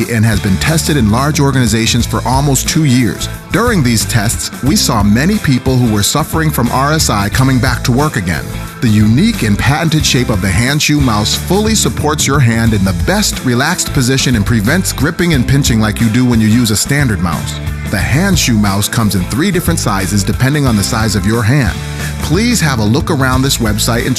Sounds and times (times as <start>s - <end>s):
Music: 0.0s - 24.1s
Speech: 0.0s - 24.1s.